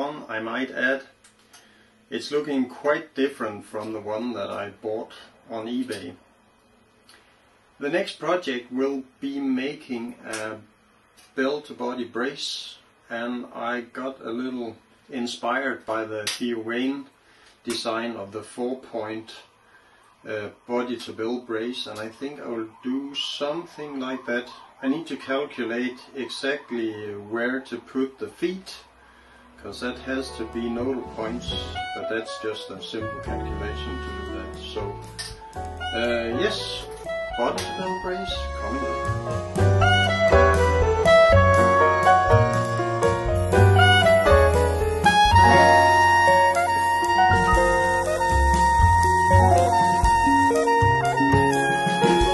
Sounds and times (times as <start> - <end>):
Speech: 0.0 - 1.2, 2.1 - 6.2, 7.8 - 10.7, 11.4 - 19.5, 20.2 - 28.9, 29.6 - 35.0, 36.0 - 39.1.